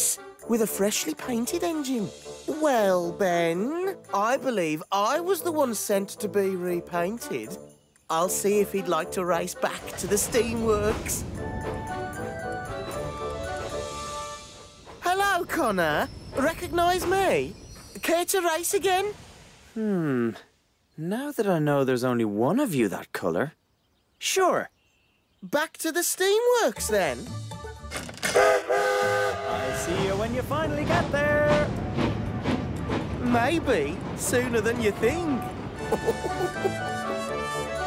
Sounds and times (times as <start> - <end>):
Speech: 0.0 - 11.2, 15.0 - 19.1, 21.0 - 23.6, 24.2 - 24.7, 25.4 - 27.3, 29.5 - 31.7, 33.2 - 35.5
Music: 0.0 - 19.0, 26.5 - 37.8
Outside, rural or natural: 0.0 - 37.8
Train: 9.9 - 18.1, 28.2 - 37.8.